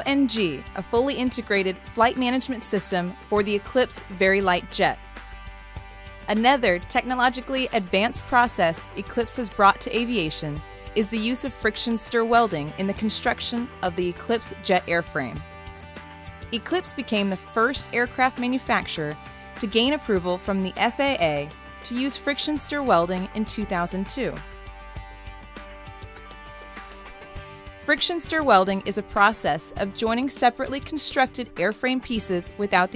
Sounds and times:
Speech: 0:00.0 - 0:05.0, 0:06.3 - 0:15.4, 0:16.6 - 0:24.4, 0:27.9 - 0:32.9
Music: 0:00.0 - 0:32.9.

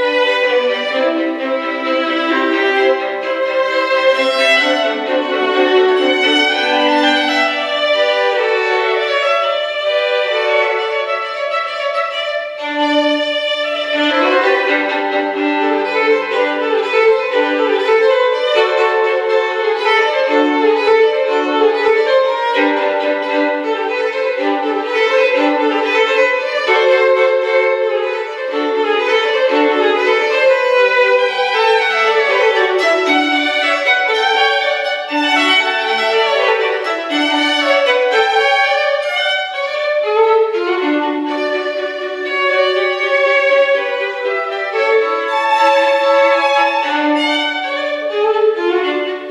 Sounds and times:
Violin, fiddle: 0:00.0 - 0:49.3.

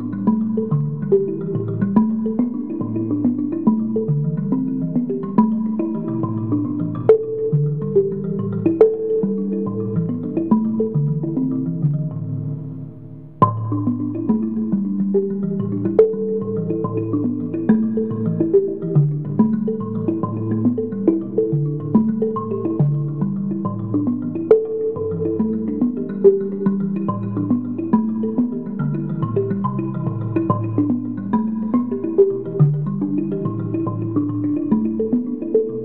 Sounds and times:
Musical instrument: 0:00.0 - 0:35.8.

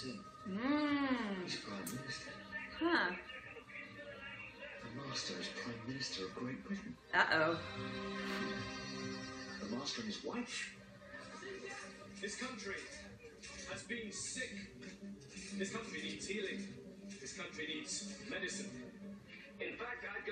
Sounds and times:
Speech: 0:00.0 - 0:07.6, 0:19.6 - 0:20.3
Music: 0:00.0 - 0:20.3.

